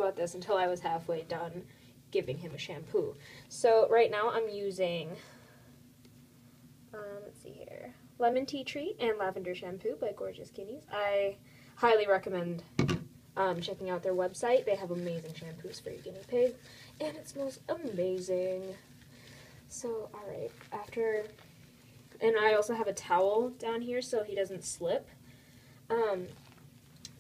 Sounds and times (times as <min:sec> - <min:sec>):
Speech: 0:00.0 - 0:05.3, 0:07.0 - 0:12.7, 0:13.4 - 0:18.9, 0:19.7 - 0:21.4, 0:22.2 - 0:25.2, 0:25.9 - 0:26.4.